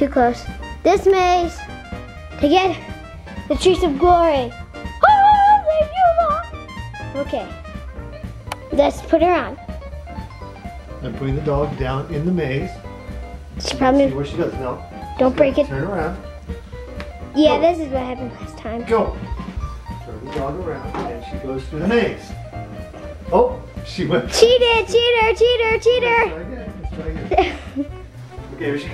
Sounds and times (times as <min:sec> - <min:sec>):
Music: 0:00.0 - 0:28.9.